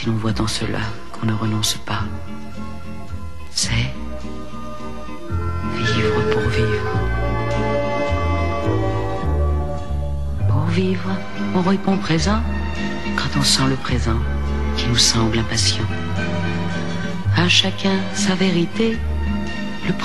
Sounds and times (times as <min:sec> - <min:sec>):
Speech: 0:00.0 - 0:02.2, 0:03.5 - 0:04.1, 0:05.8 - 0:07.0, 0:10.4 - 0:16.0, 0:17.3 - 0:19.0, 0:19.8 - 0:20.0
Music: 0:00.0 - 0:20.0.